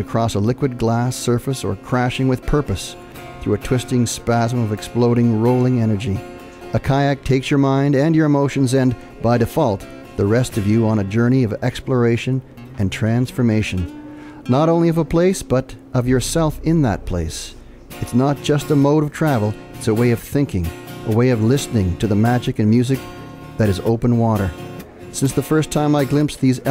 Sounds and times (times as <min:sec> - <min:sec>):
Speech: 0:00.0 - 0:13.9, 0:14.5 - 0:23.0, 0:23.6 - 0:26.7
Music: 0:00.0 - 0:26.7.